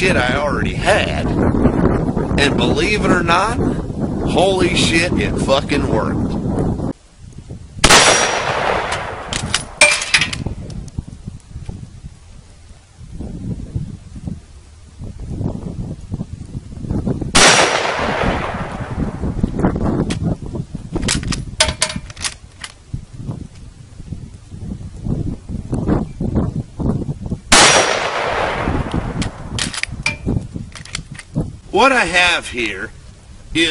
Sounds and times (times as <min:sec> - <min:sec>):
Gunshot, gunfire: 0:07.8 - 0:10.2, 0:17.4 - 0:18.6, 0:27.6 - 0:28.7.